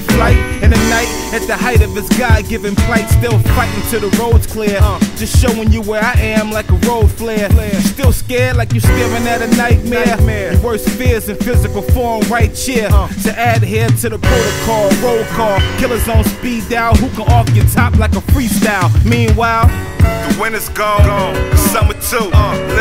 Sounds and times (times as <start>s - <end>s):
Music: 0.0s - 22.8s.